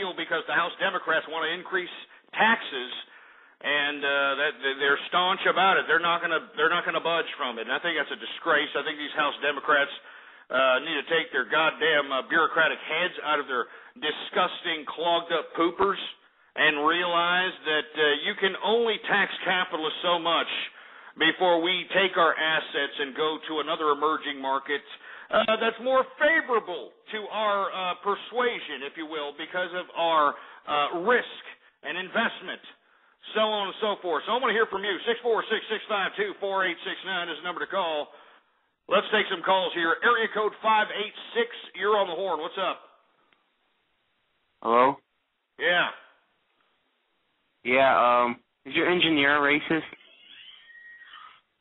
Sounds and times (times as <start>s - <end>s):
Speech: 0.0s - 38.2s, 38.9s - 43.0s, 44.6s - 45.0s, 45.6s - 46.1s, 47.6s - 50.0s.